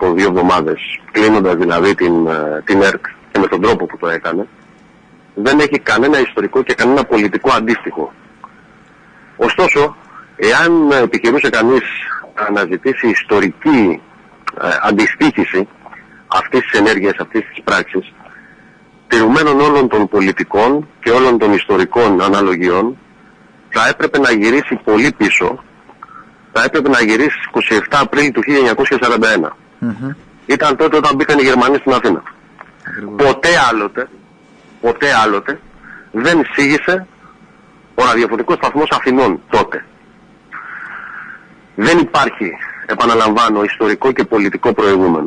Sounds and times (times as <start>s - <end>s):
Speech: 0.0s - 4.5s, 5.4s - 8.2s, 9.4s - 18.2s, 19.1s - 23.0s, 23.7s - 25.7s, 26.6s - 34.2s, 34.8s - 35.6s, 36.2s - 37.1s, 38.0s - 39.9s, 41.8s - 45.2s.